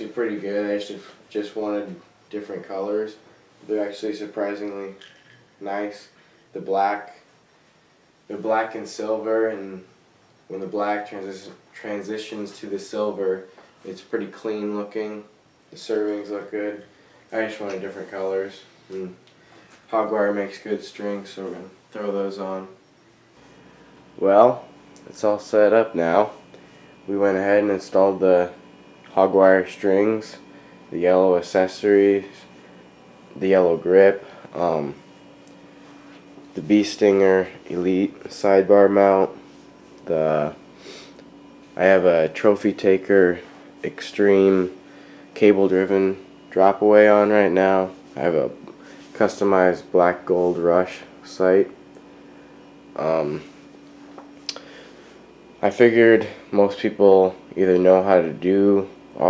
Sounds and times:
Speech: 0.0s - 7.3s, 8.3s - 9.9s, 10.5s - 19.2s, 19.9s - 22.8s, 24.2s - 26.4s, 27.1s - 32.5s, 33.4s - 35.0s, 36.6s - 39.4s, 40.0s - 40.6s, 41.8s - 44.8s, 45.4s - 51.8s, 53.0s - 53.5s, 55.6s - 59.2s.

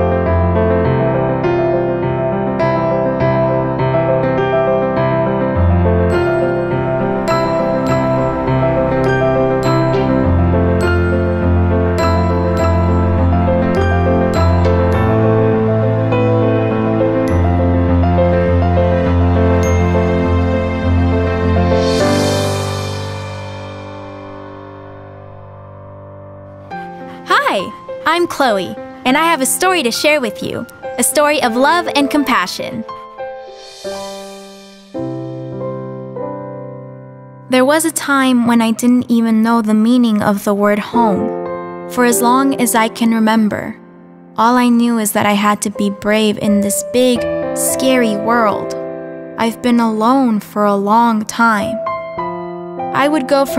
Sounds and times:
Music: 0.0s - 53.5s
Speech: 27.3s - 32.8s, 37.5s - 43.8s, 44.4s - 48.8s, 49.4s - 51.8s, 53.0s - 53.5s.

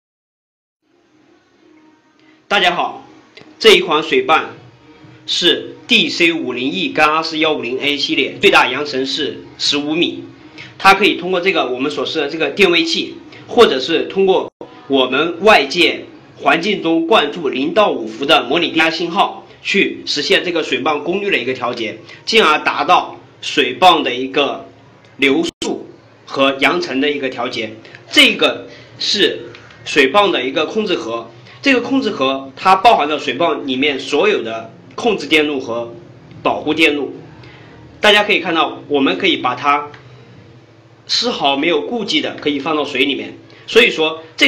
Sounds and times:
Speech: 2.5s - 4.6s, 5.3s - 37.3s, 38.0s - 40.0s, 41.1s - 44.4s.

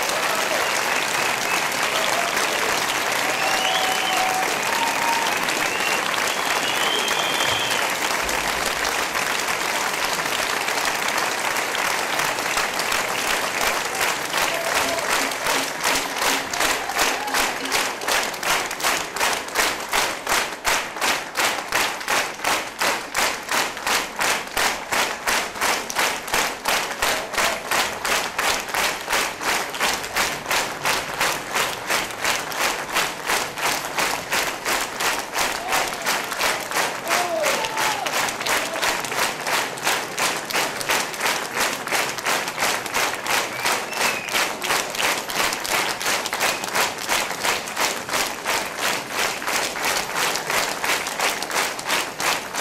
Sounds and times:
Applause: 0.0s - 52.6s.

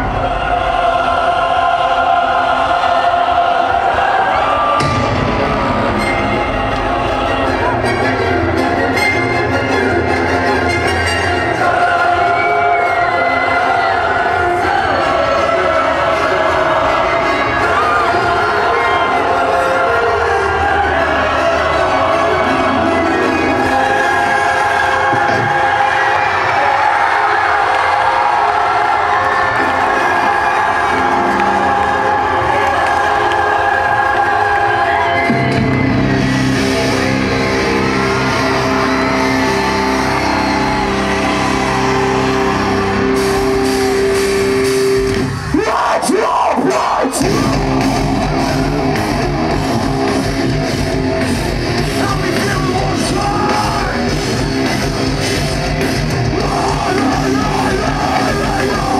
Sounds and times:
Music: 0.0s - 58.9s.

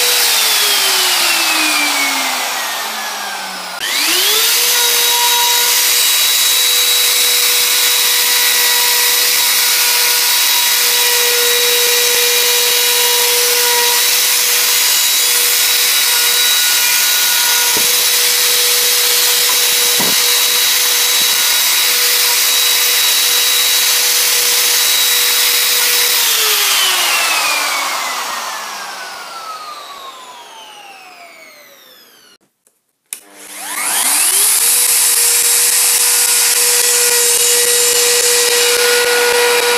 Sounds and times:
Tools: 13.4s - 23.2s.

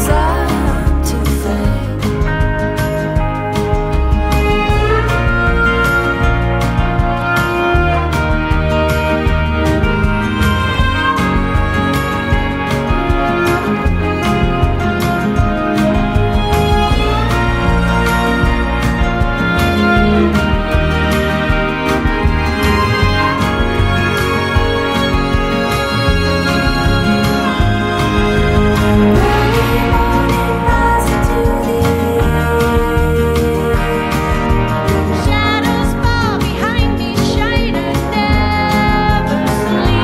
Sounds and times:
Background music: 0.0s - 40.0s.

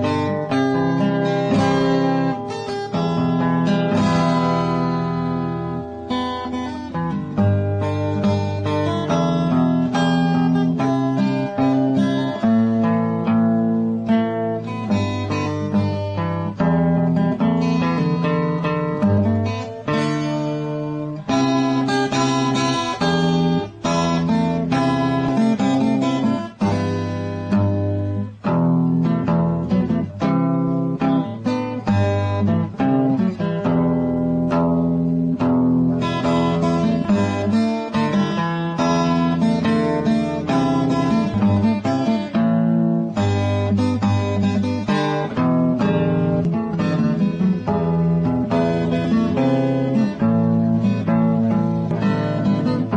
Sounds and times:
Strum: 0.0s - 52.9s.

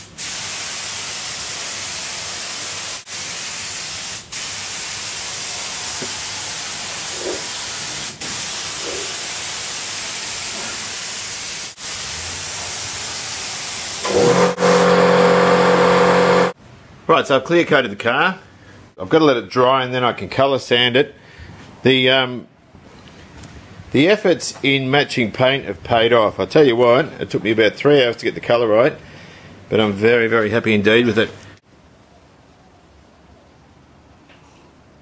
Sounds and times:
Speech: 17.1s - 21.2s, 21.8s - 22.5s, 24.0s - 29.0s, 29.7s - 31.4s.

